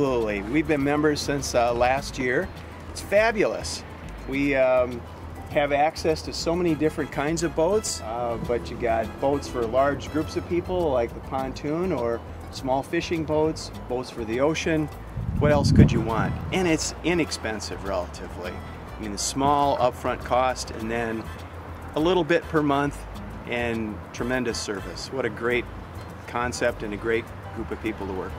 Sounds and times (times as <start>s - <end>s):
Speech: 0.0s - 21.3s, 22.0s - 25.6s, 26.3s - 28.3s
Music: 0.0s - 28.3s.